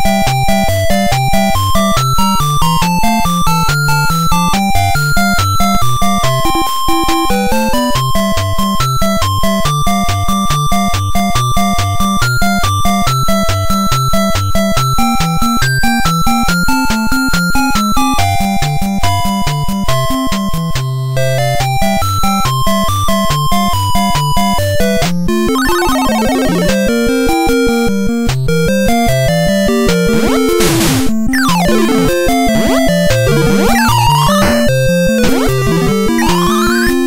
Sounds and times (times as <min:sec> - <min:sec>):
Music: 0:00.0 - 0:37.0.